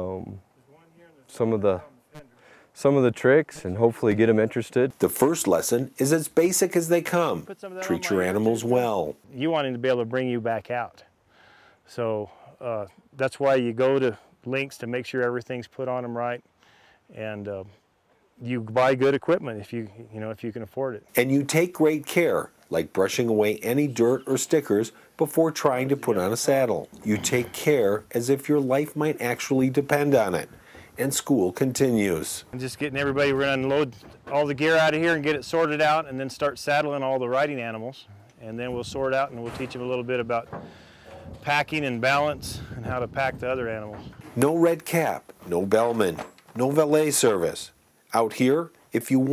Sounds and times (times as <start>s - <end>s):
Speech: 0.0s - 11.1s, 11.9s - 16.4s, 17.1s - 17.8s, 18.4s - 40.6s, 41.4s - 49.3s.